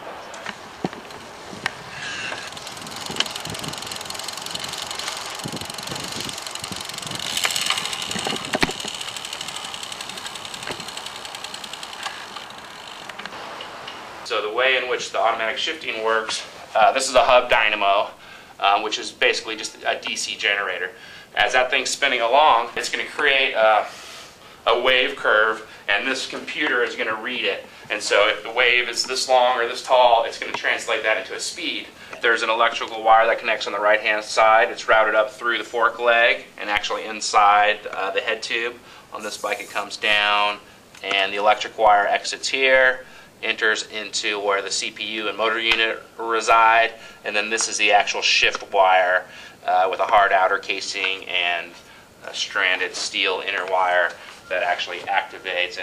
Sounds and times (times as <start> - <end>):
Speech: 14.3 - 23.9, 24.7 - 55.8.